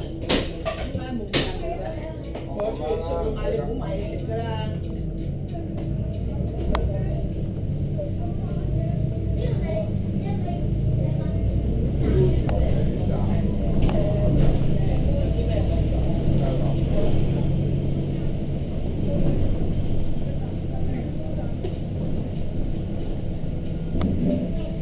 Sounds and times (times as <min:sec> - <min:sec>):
Music: 0:00.0 - 0:07.5
Speech: 0:00.8 - 0:07.4, 0:08.0 - 0:17.5, 0:20.2 - 0:22.2.